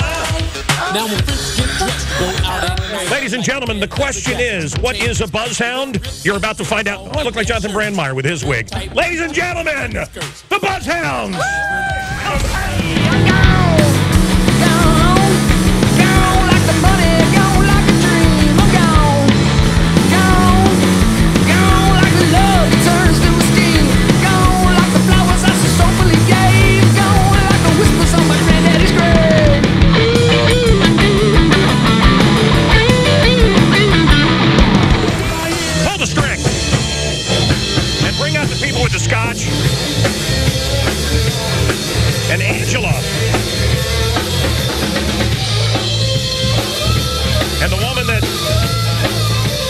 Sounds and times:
Rock and roll: 0.0s - 49.6s
Speech: 0.1s - 11.5s, 21.5s - 29.5s, 35.3s - 36.5s, 38.0s - 39.6s, 42.2s - 43.4s, 47.6s - 48.5s.

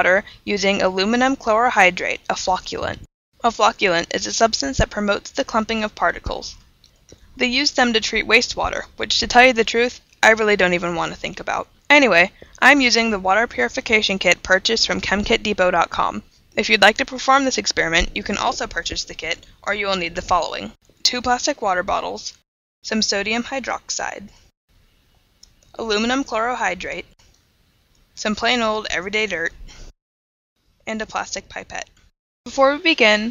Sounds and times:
Speech: 0.0s - 6.6s, 7.4s - 24.4s, 25.8s - 27.1s, 28.2s - 29.6s, 30.9s - 31.9s, 32.5s - 33.3s.

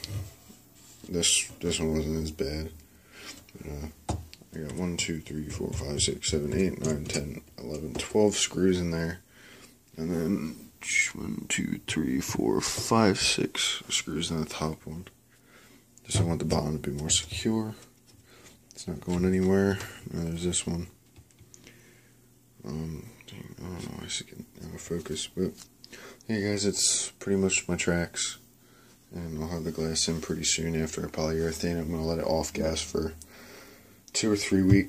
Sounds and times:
Inside, small room: 0.0s - 34.8s
Speech: 1.0s - 2.8s, 3.5s - 9.2s, 9.9s - 15.2s, 16.0s - 17.9s, 18.7s - 21.0s, 22.6s - 28.5s, 29.1s - 33.2s, 34.1s - 34.8s.

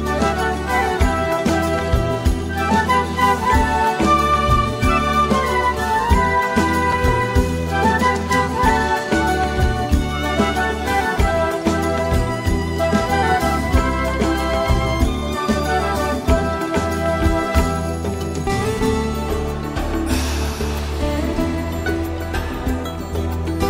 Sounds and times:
Music: 0.0s - 23.6s.

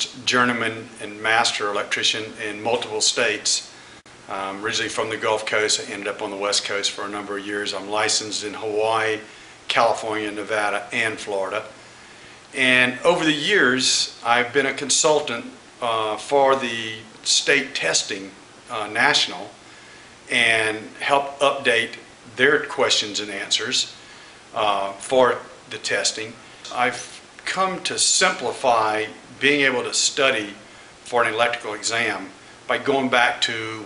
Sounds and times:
Speech: 0.0s - 3.7s, 4.3s - 11.8s, 12.6s - 19.6s, 20.3s - 24.0s, 24.6s - 33.8s
Inside, small room: 0.0s - 33.8s.

